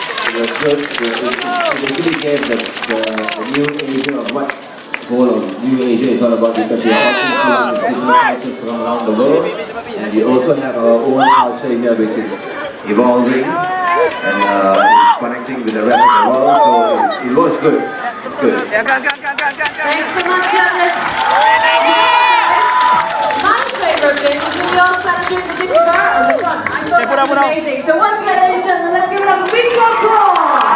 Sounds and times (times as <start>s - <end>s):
Cheering: 0.0s - 4.6s, 6.8s - 8.5s, 11.1s - 11.6s, 12.3s - 27.6s, 29.2s - 30.7s
Crowd: 0.0s - 30.7s.